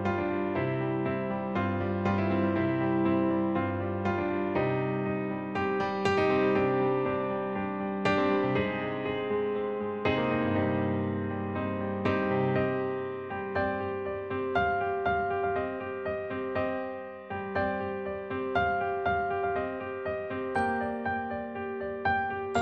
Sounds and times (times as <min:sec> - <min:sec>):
Music: 0:00.0 - 0:22.6.